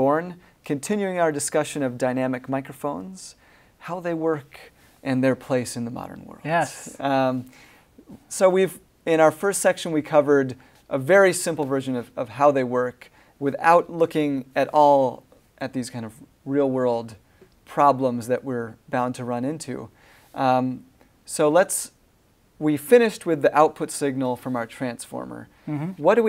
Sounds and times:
Speech: 0.0s - 7.5s, 8.3s - 22.0s, 22.6s - 26.2s.

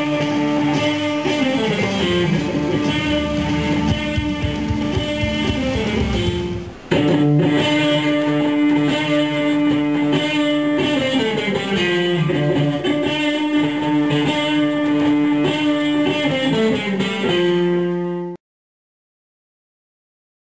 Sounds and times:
Music: 0.0s - 18.4s.

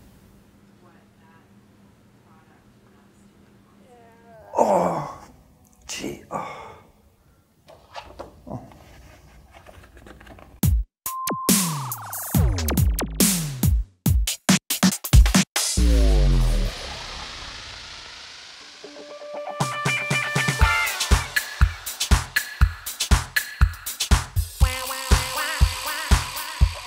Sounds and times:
Drum machine: 10.6s - 17.2s, 19.2s - 26.8s.

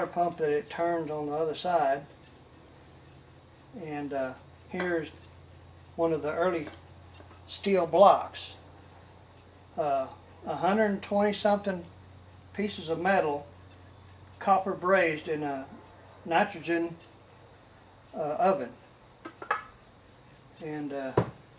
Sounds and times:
Speech: 0.0s - 2.1s, 3.8s - 5.2s, 6.0s - 6.8s, 7.5s - 8.6s, 9.8s - 11.9s, 12.6s - 13.5s, 14.4s - 17.0s, 18.2s - 18.8s, 20.6s - 21.3s.

